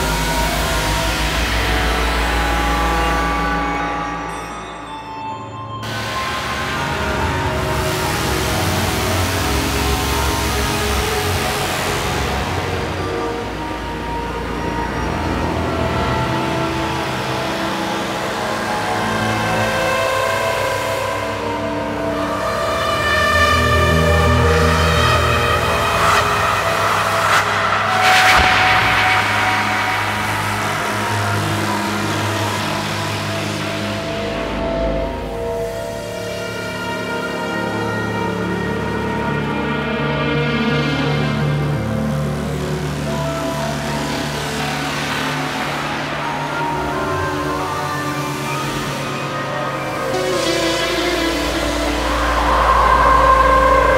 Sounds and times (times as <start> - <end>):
Ambient music: 0.0 - 53.9.